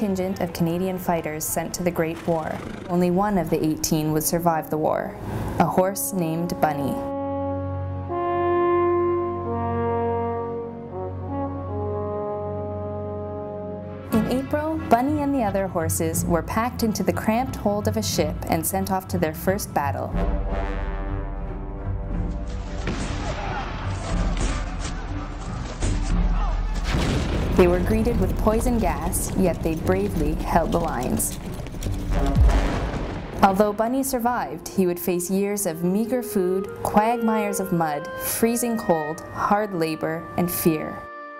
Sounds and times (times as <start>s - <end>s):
Speech: 0.0s - 7.1s, 14.2s - 20.2s, 27.6s - 31.3s, 33.4s - 41.0s
Music: 0.0s - 41.3s.